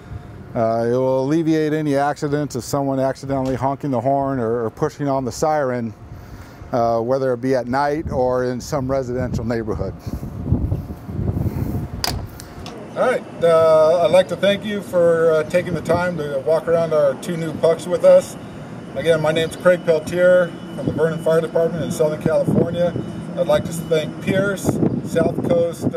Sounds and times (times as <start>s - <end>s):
Speech: 0.6s - 6.0s, 6.7s - 10.0s, 13.0s - 18.4s, 19.0s - 25.9s.